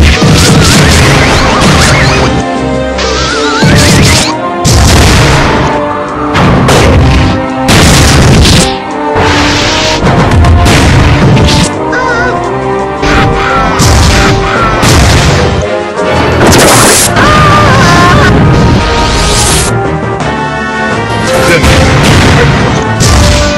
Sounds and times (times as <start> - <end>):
Music: 0.0 - 23.5.